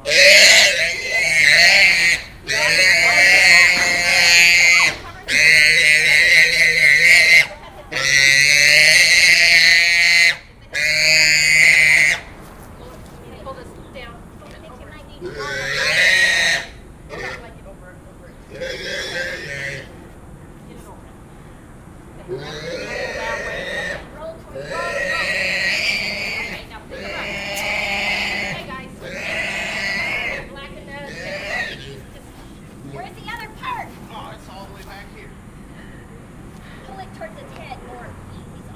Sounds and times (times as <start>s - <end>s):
Oink: 0.0s - 12.3s, 15.2s - 17.4s, 18.5s - 19.9s, 22.3s - 30.5s, 31.1s - 32.1s
Speech: 2.5s - 8.2s, 12.8s - 15.6s, 22.2s - 29.5s, 36.8s - 38.7s.